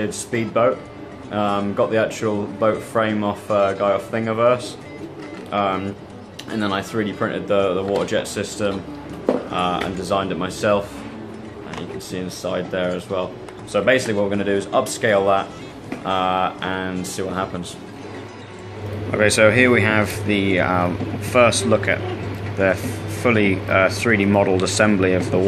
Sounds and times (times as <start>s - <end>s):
Speech: 0.0s - 4.8s, 5.5s - 11.0s, 11.6s - 17.8s, 19.1s - 25.4s
Music: 0.0s - 25.4s.